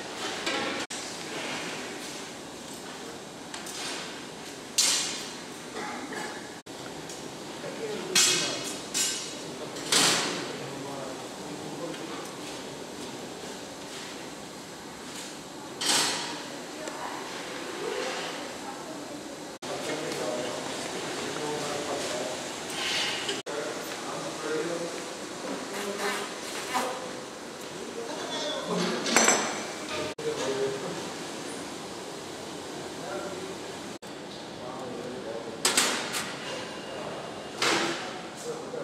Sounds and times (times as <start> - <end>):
Speech: 7.6 - 8.8, 9.5 - 12.8, 16.6 - 22.4, 30.2 - 31.1, 34.6 - 35.6, 36.4 - 38.8.